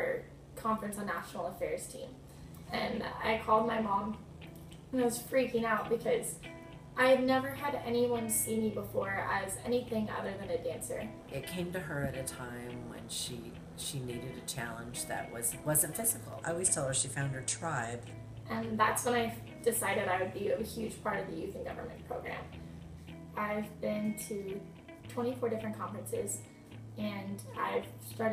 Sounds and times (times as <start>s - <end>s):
Inside, small room: 0.0s - 28.3s
Music: 0.0s - 28.3s
Speech: 7.0s - 22.3s, 27.0s - 28.3s.